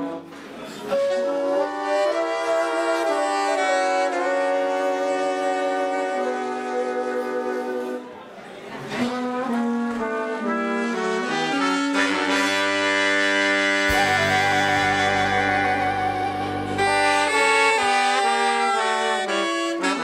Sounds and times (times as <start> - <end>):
Trumpet: 0.0 - 8.1, 8.9 - 20.0.